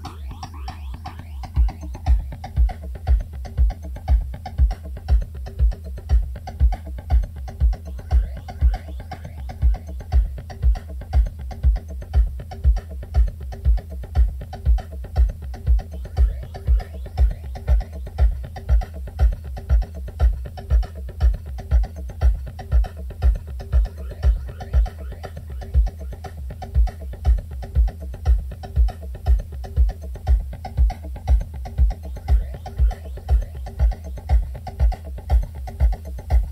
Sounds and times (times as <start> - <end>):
Music: 0.0 - 36.5.